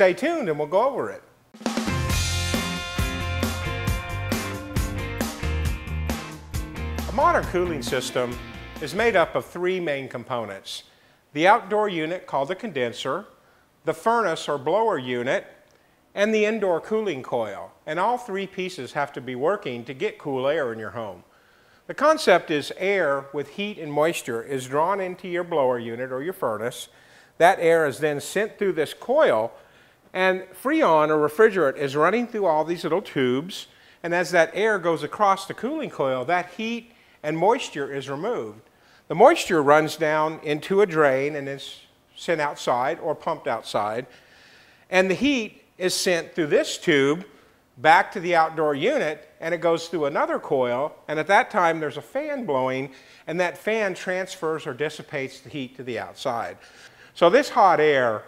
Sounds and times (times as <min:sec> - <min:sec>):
Speech: 0:00.0 - 0:01.3, 0:07.1 - 0:15.6, 0:16.2 - 0:21.3, 0:21.9 - 0:44.1, 0:44.9 - 0:56.6, 0:57.2 - 0:58.2.